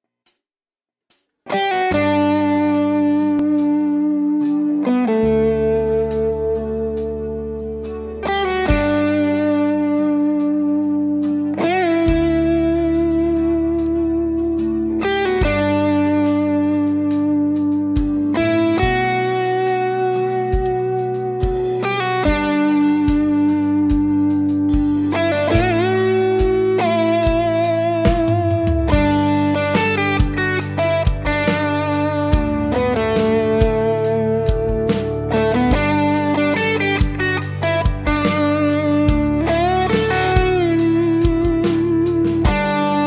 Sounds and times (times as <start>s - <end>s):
Bass guitar: 1.5s - 43.0s.